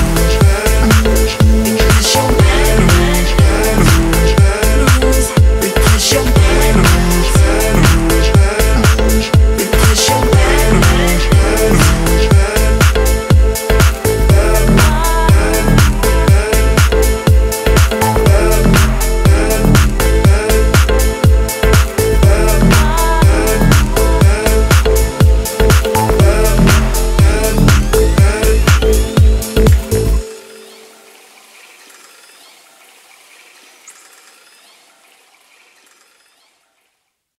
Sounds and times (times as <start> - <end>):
Music: 0.0 - 31.4
Outside, rural or natural: 0.0 - 37.2.